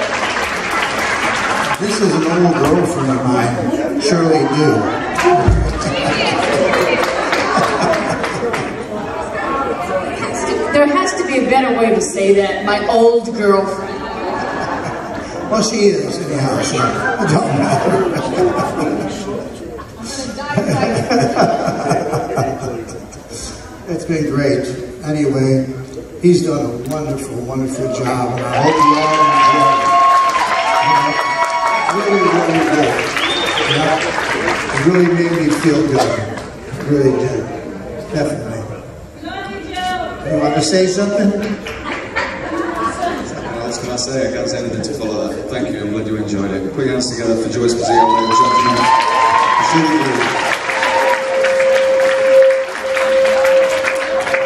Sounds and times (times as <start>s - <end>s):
Inside, large room or hall: 0.0s - 54.4s.